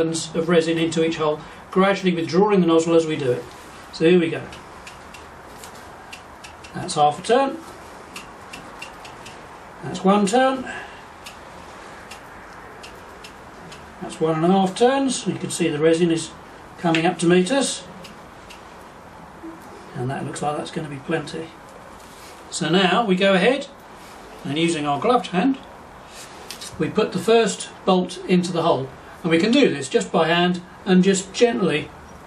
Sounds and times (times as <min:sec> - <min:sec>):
Speech: 0:00.0 - 0:04.6, 0:06.7 - 0:07.7, 0:09.8 - 0:10.8, 0:14.0 - 0:17.9, 0:19.9 - 0:21.6, 0:22.5 - 0:23.8, 0:24.4 - 0:25.7, 0:26.7 - 0:32.0.